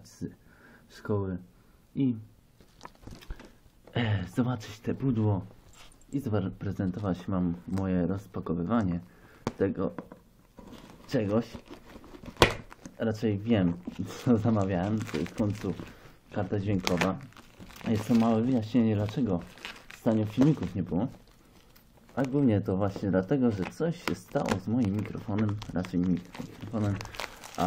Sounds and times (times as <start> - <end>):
Speech: 0.0 - 2.3, 3.9 - 5.5, 6.1 - 10.1, 11.1 - 11.6, 13.0 - 21.2, 22.1 - 27.6.